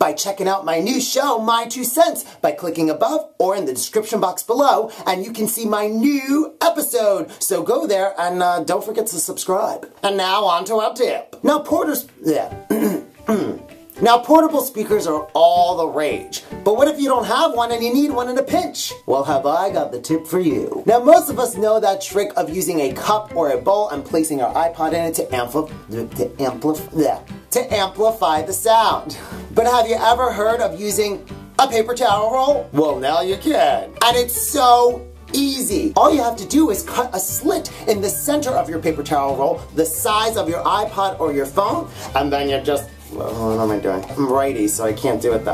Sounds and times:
Speech: 0.0 - 12.6, 14.0 - 45.5.

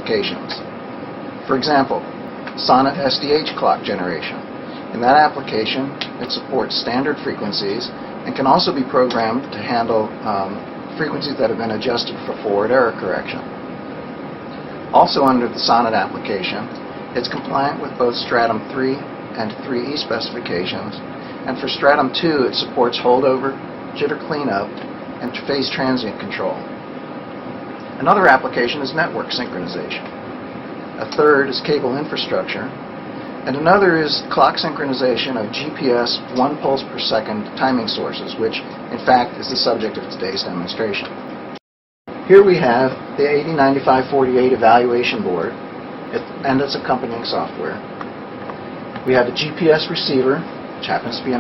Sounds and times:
Speech: 0.0 - 0.7, 1.4 - 13.5, 14.9 - 26.7, 28.0 - 30.1, 31.0 - 32.8, 33.4 - 41.2, 42.3 - 47.9, 49.0 - 51.4.

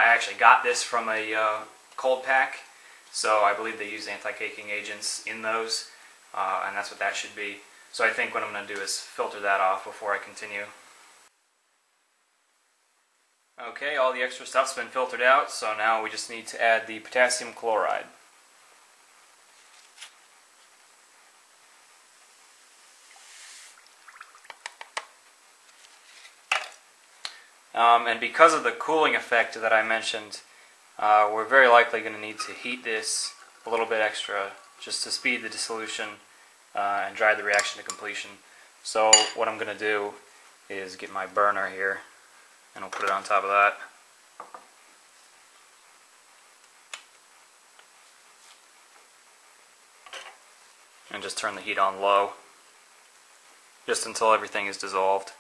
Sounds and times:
Speech: 0.0 - 10.8, 13.6 - 18.2, 27.8 - 42.1, 42.8 - 44.0, 51.1 - 52.4, 53.9 - 55.4.

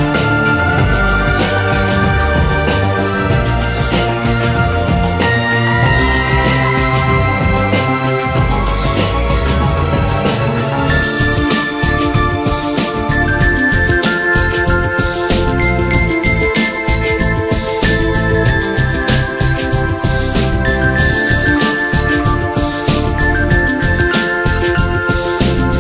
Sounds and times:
Background music: 0.0 - 25.8.

